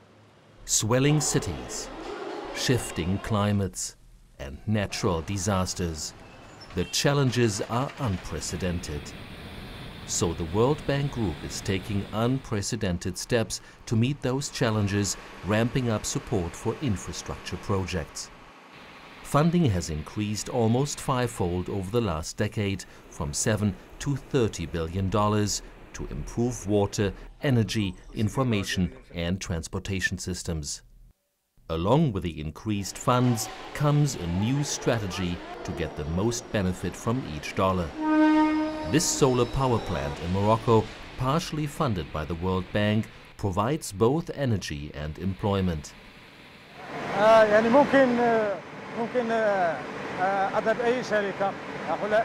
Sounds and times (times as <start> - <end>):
Speech: 0.7 - 2.0, 2.6 - 9.1, 10.1 - 18.3, 19.3 - 30.8, 31.7 - 38.0, 38.8 - 45.9, 47.2 - 52.2.